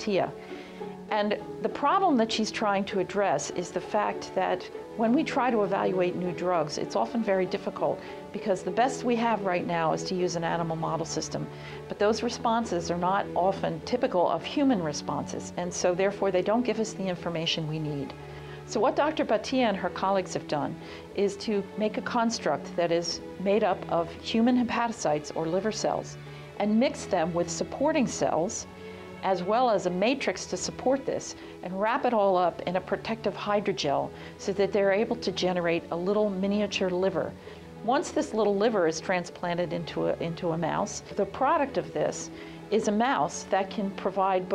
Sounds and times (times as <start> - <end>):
Speech: 0.0 - 0.3, 1.1 - 18.1, 18.7 - 28.7, 29.3 - 44.5
Music: 0.0 - 44.5.